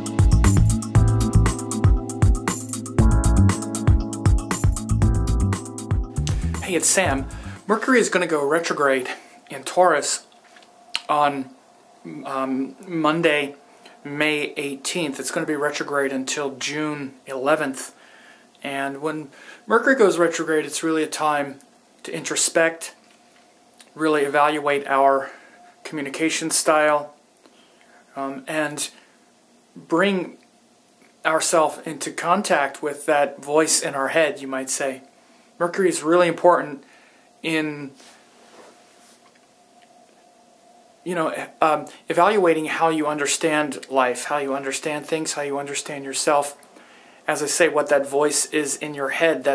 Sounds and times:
Speech: 0:06.6 - 0:10.3, 0:11.0 - 0:18.0, 0:18.6 - 0:23.0, 0:23.9 - 0:27.2, 0:28.2 - 0:29.0, 0:29.8 - 0:30.4, 0:31.2 - 0:35.0, 0:35.6 - 0:36.8, 0:37.4 - 0:38.0, 0:41.0 - 0:46.6, 0:47.3 - 0:49.5.

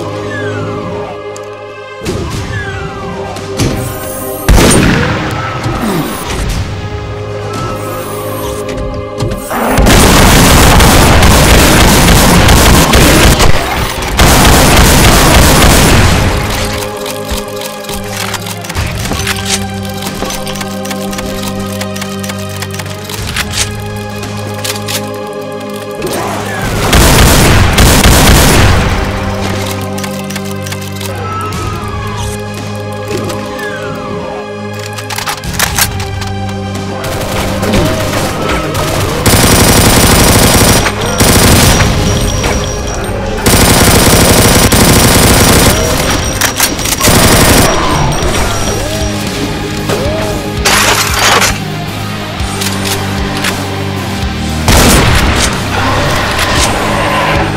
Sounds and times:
Music: 0:00.0 - 0:57.5.

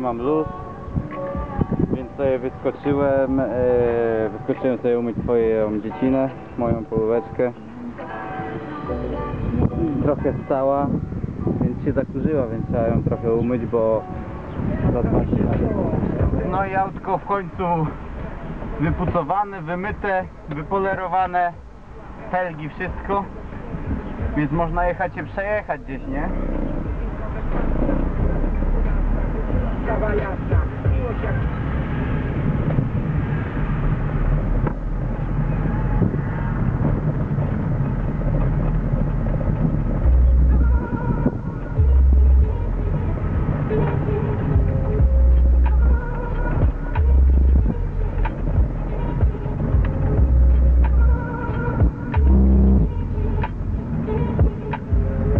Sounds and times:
Car: 0:00.0 - 0:55.3
Speech: 0:01.9 - 0:07.7, 0:09.7 - 0:11.0, 0:11.6 - 0:14.0, 0:14.8 - 0:18.0, 0:18.8 - 0:21.6, 0:22.2 - 0:23.4, 0:24.2 - 0:27.5.

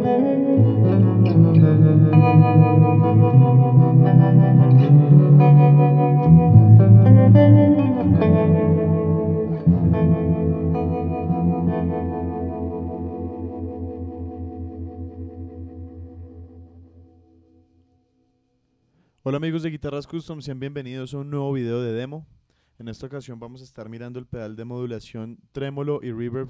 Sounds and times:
Music: 0:00.0 - 0:18.6
Speech: 0:19.3 - 0:26.5.

